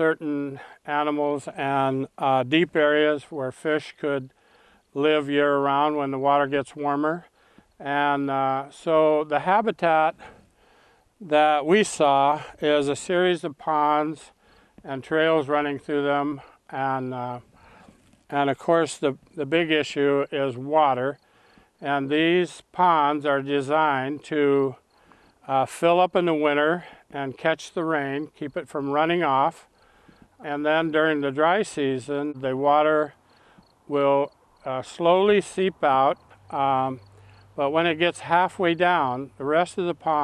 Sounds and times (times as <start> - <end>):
Speech: 0.0 - 4.3, 5.0 - 10.3, 11.2 - 14.3, 14.9 - 17.5, 18.3 - 21.2, 21.8 - 24.8, 25.5 - 29.7, 30.4 - 33.2, 33.9 - 37.0, 37.6 - 40.2.